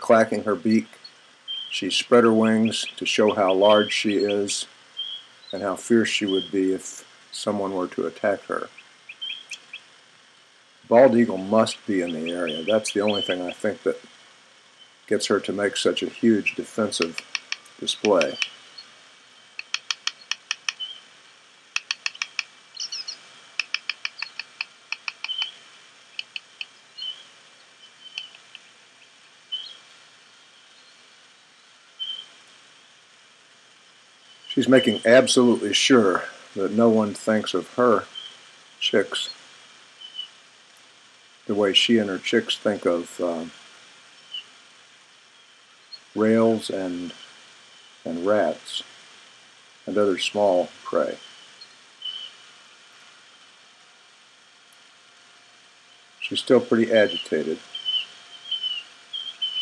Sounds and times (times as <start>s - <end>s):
Bird: 0.1s - 9.9s, 10.9s - 14.1s, 14.7s - 32.4s, 34.2s - 39.4s, 40.0s - 40.4s, 41.7s - 44.6s, 45.3s - 49.0s, 50.1s - 53.5s, 55.8s - 59.6s.